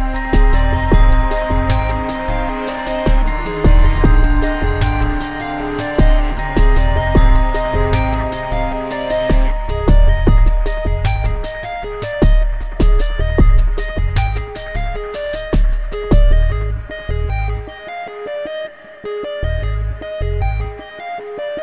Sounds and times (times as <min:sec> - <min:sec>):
Music: 0:00.0 - 0:21.6.